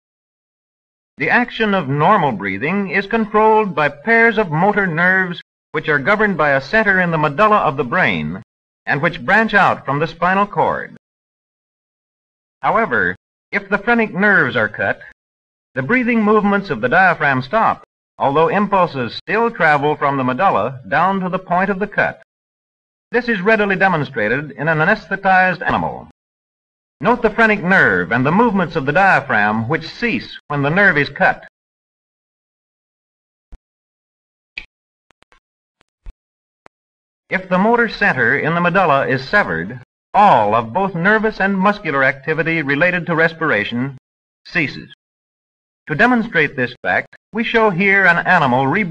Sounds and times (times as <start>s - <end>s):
Speech: 1.2s - 11.0s, 12.6s - 15.2s, 15.8s - 22.3s, 23.2s - 26.2s, 27.0s - 31.5s, 37.3s - 45.0s, 45.9s - 48.9s.